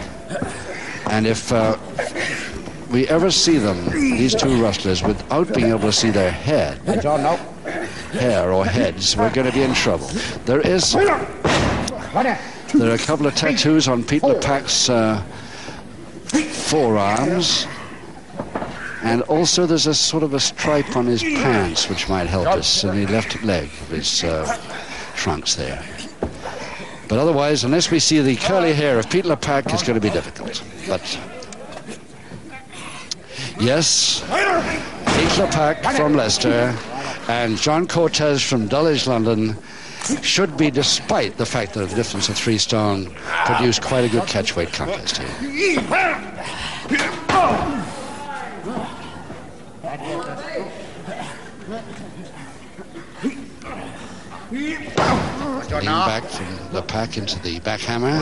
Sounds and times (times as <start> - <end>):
Inside, large room or hall: 0.0 - 58.2
Speech: 1.1 - 2.3, 2.9 - 15.3, 16.3 - 17.8, 19.0 - 26.1, 27.1 - 46.4, 53.2 - 58.2.